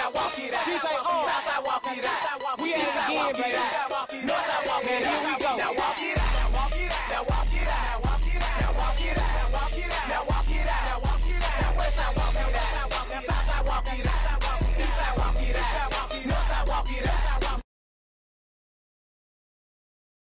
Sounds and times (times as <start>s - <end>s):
Music: 0.0s - 17.7s.